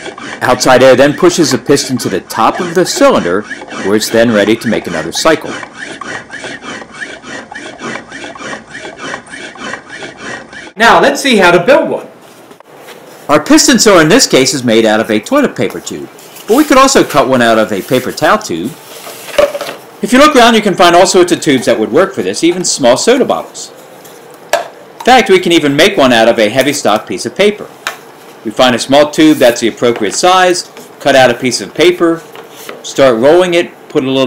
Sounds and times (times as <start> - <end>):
Speech: 0.4 - 5.6, 10.8 - 12.1, 13.3 - 18.8, 20.0 - 23.8, 25.0 - 27.7, 28.4 - 32.2, 32.8 - 34.2.